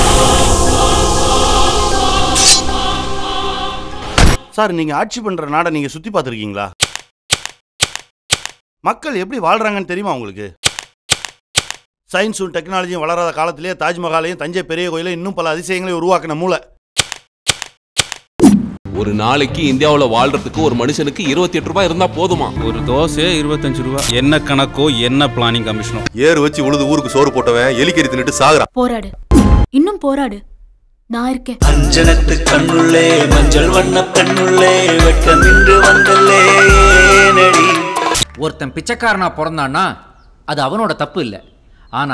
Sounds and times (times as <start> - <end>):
Music: 0.0 - 4.2, 18.9 - 28.6, 31.6 - 38.4.